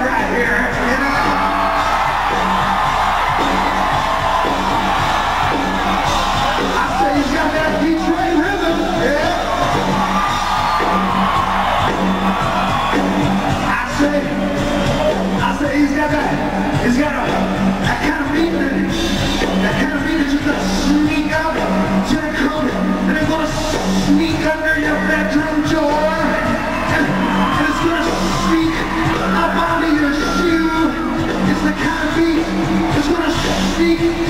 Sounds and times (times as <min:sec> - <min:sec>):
Music: 0:00.0 - 0:34.3.